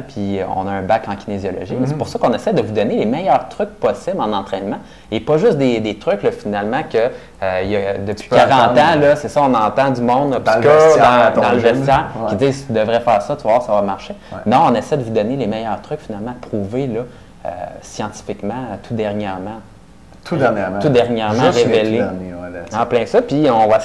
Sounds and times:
Speech: 0.0 - 23.8.

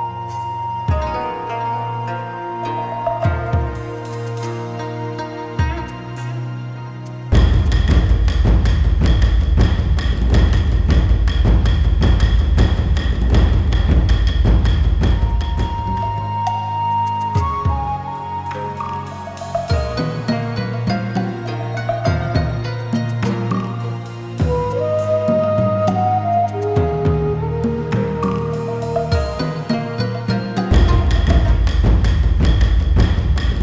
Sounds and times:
Music: 0.0 - 33.6.

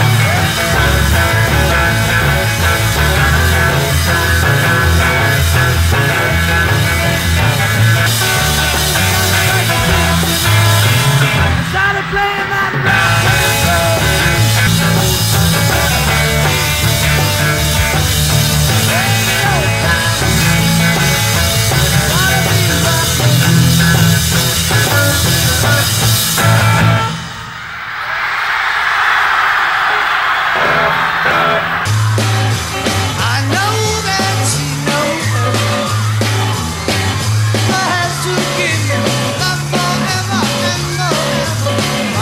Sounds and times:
Music: 0.0 - 27.4, 30.6 - 42.2.

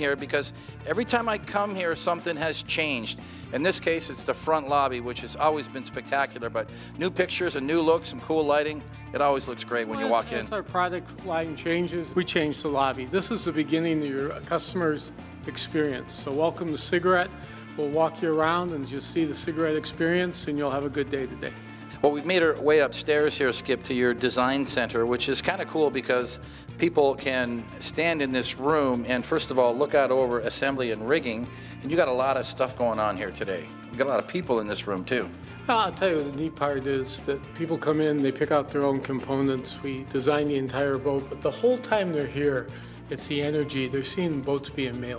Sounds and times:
Music: 0.0 - 45.1
Speech: 0.0 - 45.1.

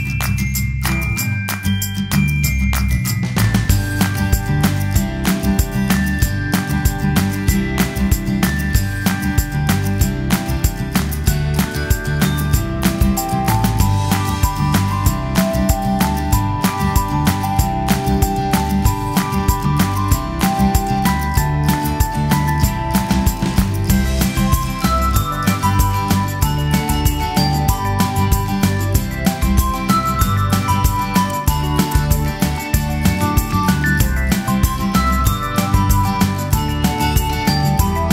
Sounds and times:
Music: 0.0 - 38.1.

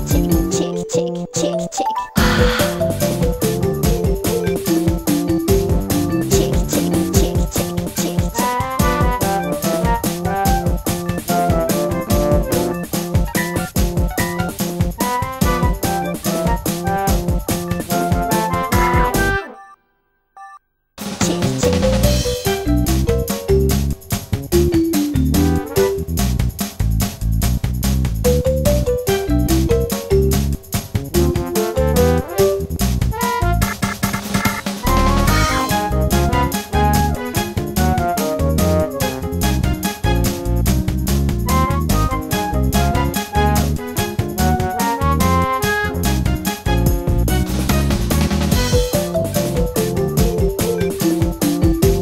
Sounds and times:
Soundtrack music: 2.2 - 19.7, 21.2 - 26.5, 28.3 - 52.0.

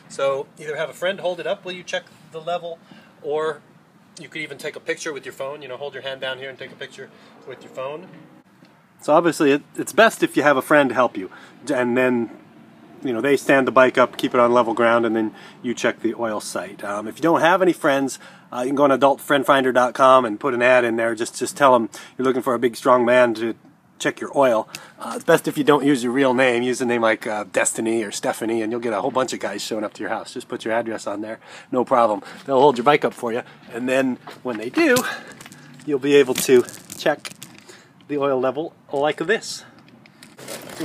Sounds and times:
Speech: 0.1 - 3.6, 4.2 - 8.1, 9.0 - 12.3, 13.0 - 35.3, 38.1 - 39.8.

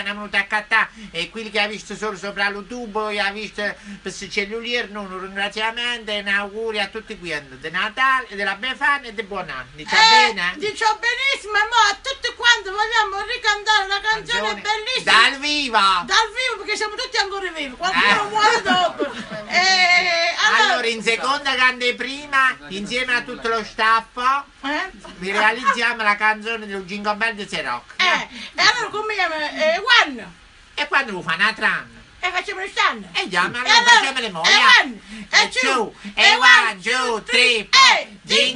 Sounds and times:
Speech: 0.0 - 38.5.

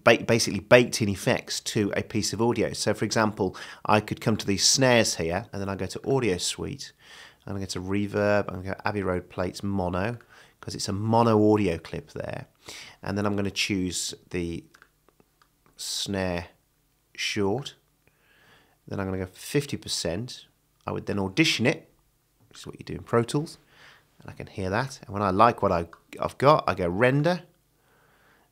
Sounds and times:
Speech: 0.0 - 14.8, 15.8 - 17.8, 18.9 - 21.9, 22.5 - 23.6, 24.2 - 27.6.

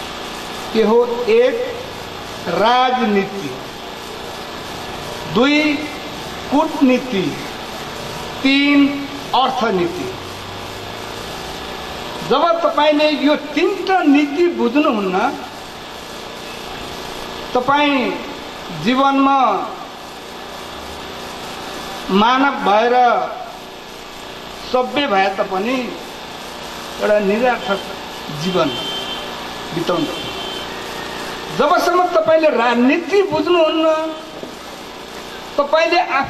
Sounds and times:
Narration, monologue: 0.0 - 36.2
Male speech, man speaking: 0.8 - 3.6, 5.3 - 7.5, 8.4 - 10.2, 12.2 - 15.5, 17.6 - 19.8, 22.1 - 23.6, 24.6 - 26.0, 27.0 - 28.9, 29.7 - 30.3, 31.6 - 34.4, 35.6 - 36.2.

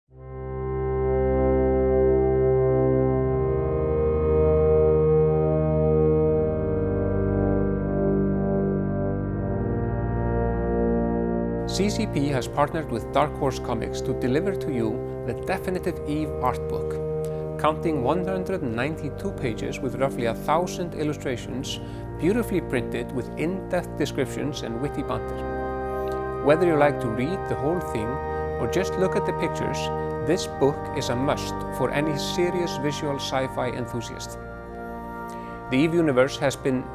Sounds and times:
Music: 0.0 - 36.9.

